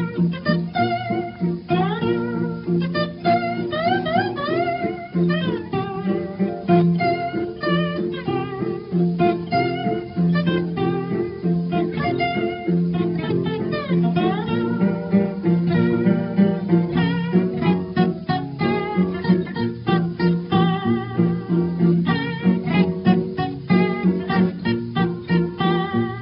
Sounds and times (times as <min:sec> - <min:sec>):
Music: 0:00.0 - 0:26.2.